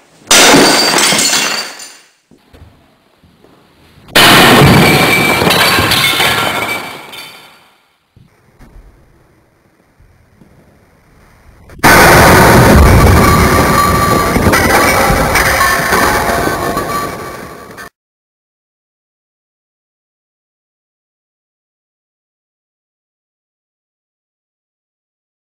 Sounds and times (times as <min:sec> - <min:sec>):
Smash, crash: 0:00.3 - 0:01.9, 0:04.1 - 0:07.7, 0:11.7 - 0:17.9.